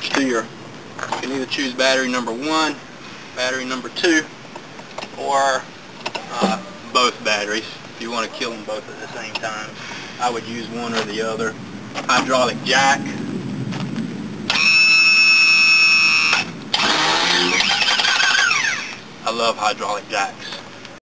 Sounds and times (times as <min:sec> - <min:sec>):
Speech: 0:00.0 - 0:00.5, 0:01.2 - 0:02.8, 0:03.4 - 0:04.3, 0:05.2 - 0:13.2, 0:19.2 - 0:20.6.